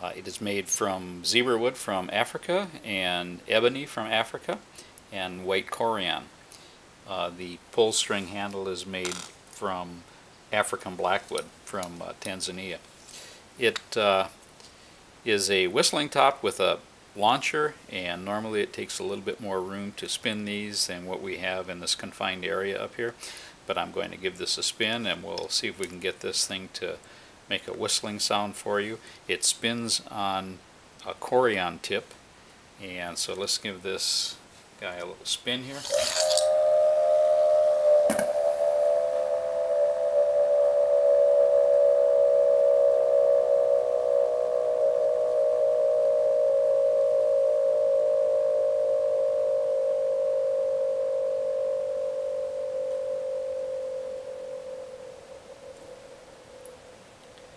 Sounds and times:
Speech: 0.0 - 6.3, 7.1 - 12.8, 13.6 - 14.4, 15.3 - 32.2, 32.8 - 35.9.

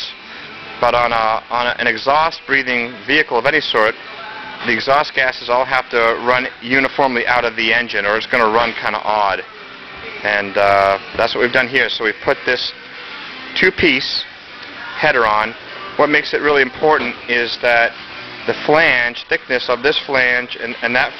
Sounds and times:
Music: 0.0 - 21.1
Speech: 0.8 - 4.0, 4.6 - 9.5, 10.2 - 12.7, 13.6 - 14.3, 15.0 - 17.9, 18.5 - 21.1.

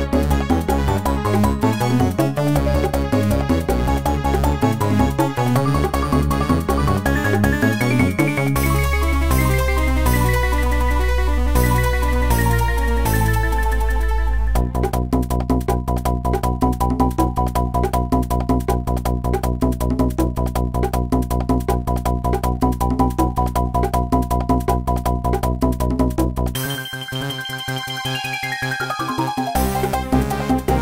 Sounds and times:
Music: 0.0 - 30.8.

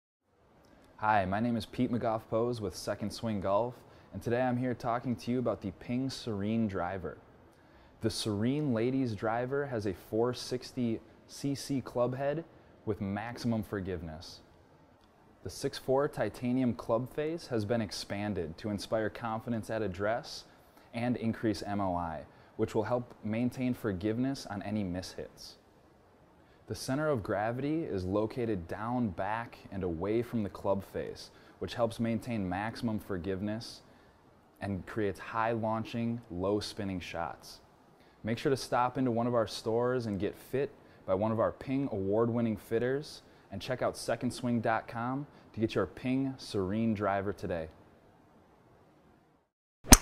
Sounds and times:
Speech: 1.0 - 7.2, 8.0 - 14.5, 15.4 - 25.7, 26.7 - 33.9, 34.6 - 47.8.

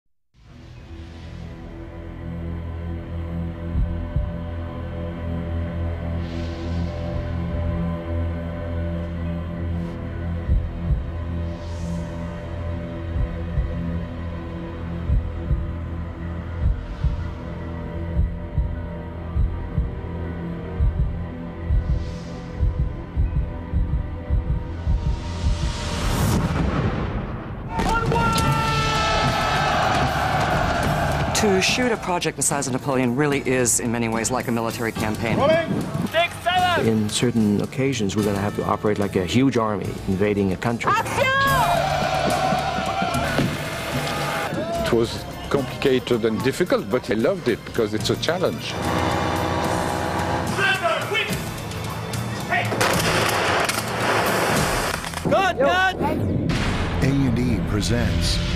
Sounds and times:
Scary music: 0.4 - 58.5.

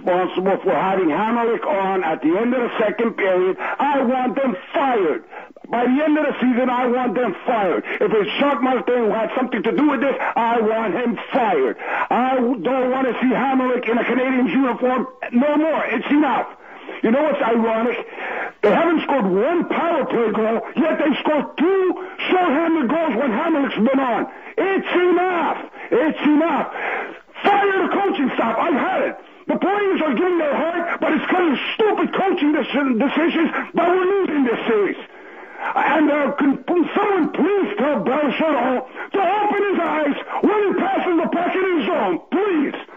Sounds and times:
Speech: 0.0 - 26.8, 27.4 - 35.1, 35.7 - 42.9
Radio: 0.0 - 42.9.

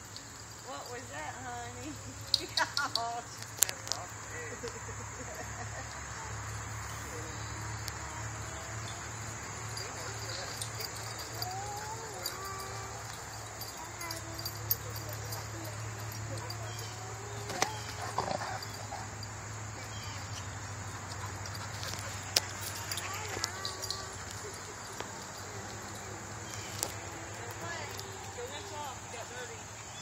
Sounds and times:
Outside, rural or natural: 0.0 - 30.0
Dog: 9.7 - 19.2.

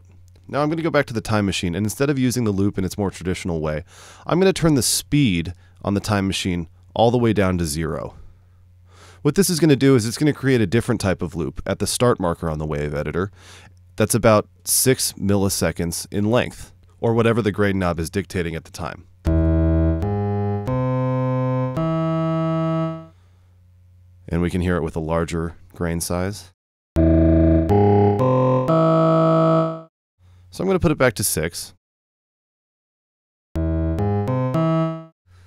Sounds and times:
Speech: 0.5 - 8.2, 9.2 - 13.3, 14.0 - 19.1, 24.3 - 26.6, 30.5 - 31.8.

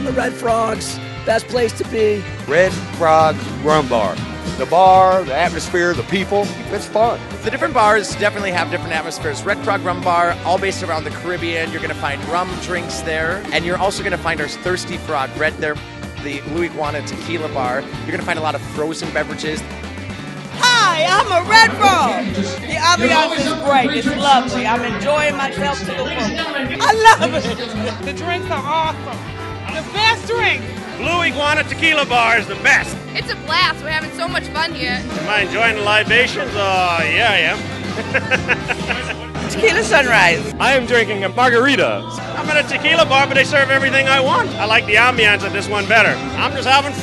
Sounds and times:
Music: 0.0 - 47.0.

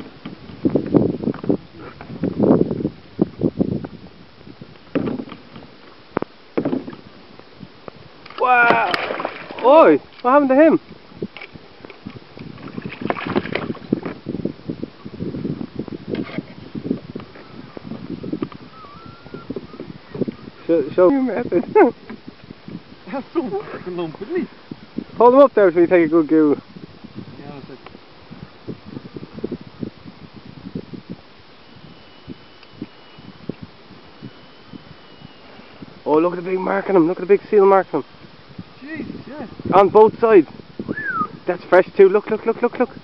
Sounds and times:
Boat, Water vehicle: 0.0 - 43.0.

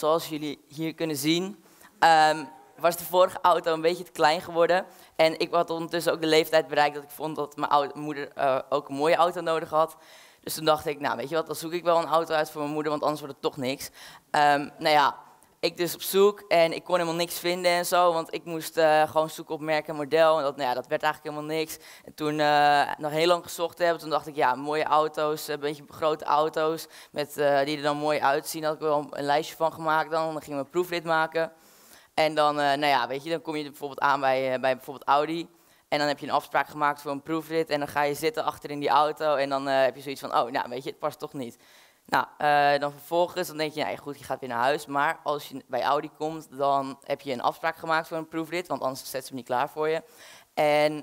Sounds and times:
Speech: 0.0 - 31.5, 32.2 - 50.0, 50.6 - 51.0.

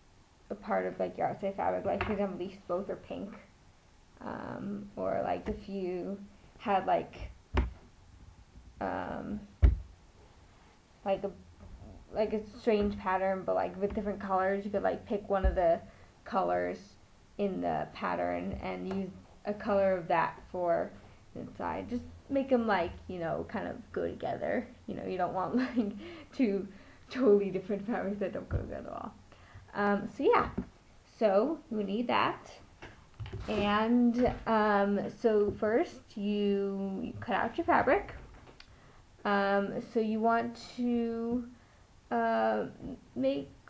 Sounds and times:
Inside, small room: 0.0 - 43.7
Speech: 0.5 - 3.5, 4.2 - 7.4, 8.8 - 9.5, 11.0 - 32.7, 33.4 - 38.2, 39.2 - 43.7.

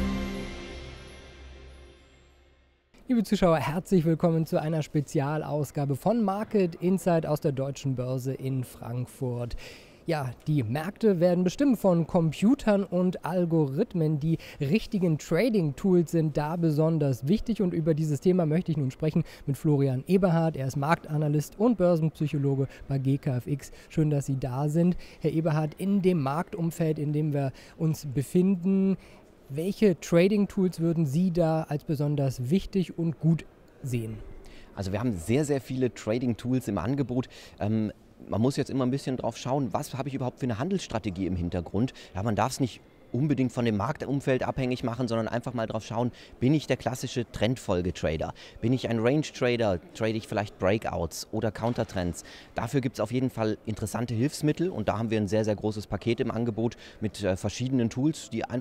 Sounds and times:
Speech: 3.0 - 34.2, 34.8 - 58.6.

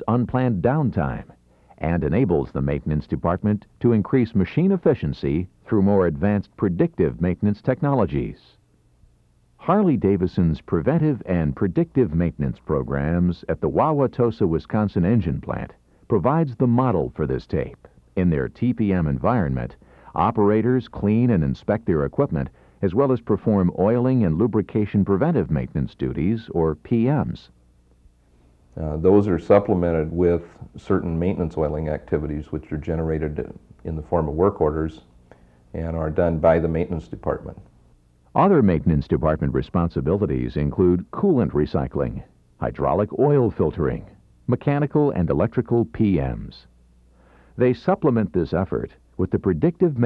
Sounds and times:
Speech: 0.0 - 8.6, 9.6 - 27.6, 28.8 - 35.1, 35.7 - 37.7, 38.3 - 46.7, 47.6 - 50.0.

